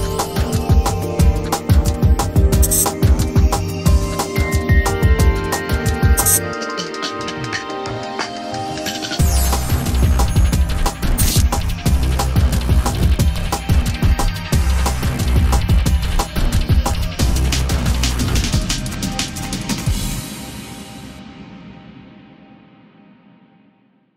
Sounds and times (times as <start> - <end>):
Music: 0.0 - 24.1.